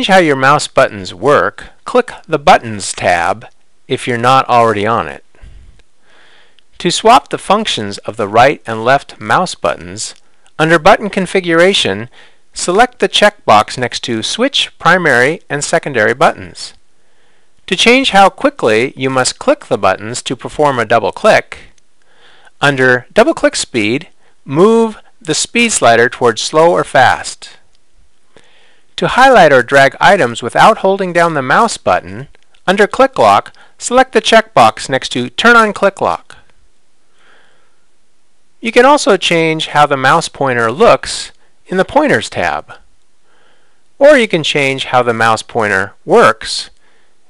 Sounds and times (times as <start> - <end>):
Speech: 0.0 - 5.3, 6.8 - 16.8, 17.7 - 21.8, 22.6 - 27.6, 29.0 - 36.5, 38.6 - 42.9, 44.0 - 46.8.